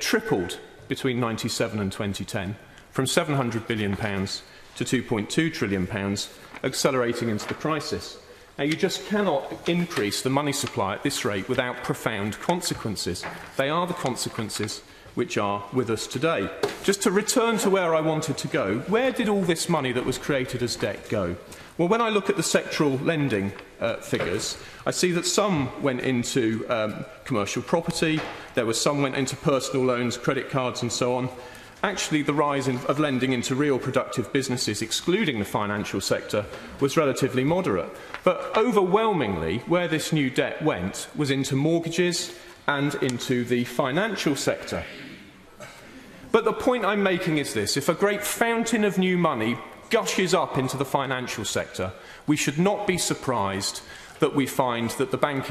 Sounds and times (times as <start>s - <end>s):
Speech: 0.0s - 45.3s, 46.3s - 55.5s.